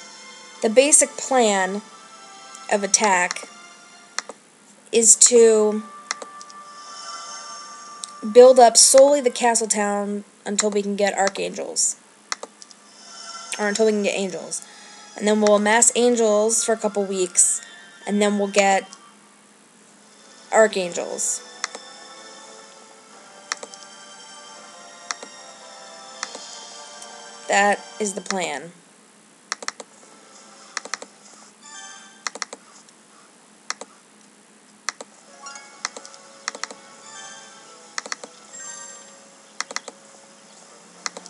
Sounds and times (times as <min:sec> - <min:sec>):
Music: 0:00.0 - 0:04.4, 0:05.0 - 0:10.2, 0:12.7 - 0:19.4, 0:20.0 - 0:28.6, 0:30.0 - 0:32.4, 0:35.2 - 0:41.2
Speech: 0:00.6 - 0:01.8, 0:02.7 - 0:03.5, 0:05.0 - 0:05.9, 0:08.2 - 0:12.0, 0:13.6 - 0:14.6, 0:15.2 - 0:18.9, 0:20.6 - 0:21.4, 0:27.5 - 0:28.8
Computer keyboard: 0:32.3 - 0:32.6, 0:35.9 - 0:36.8.